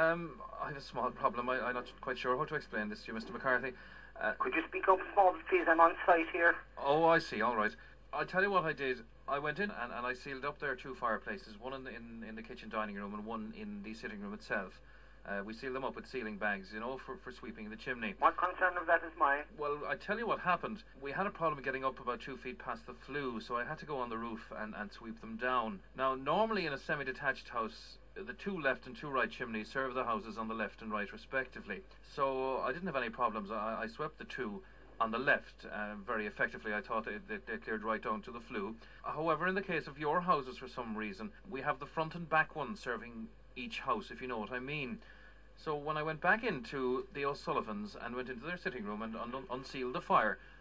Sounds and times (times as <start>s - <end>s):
Speech: 0.0s - 45.0s, 45.6s - 50.4s.